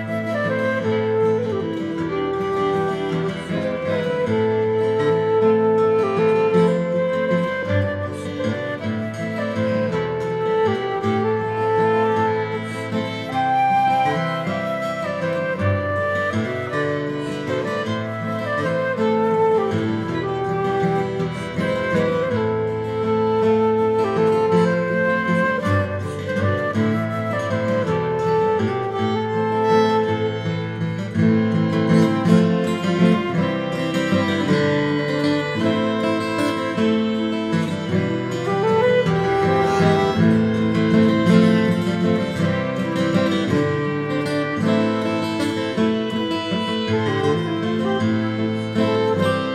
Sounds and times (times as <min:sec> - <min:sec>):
Violin, fiddle: 0:00.0 - 0:49.5
Strum: 0:00.2 - 0:49.5.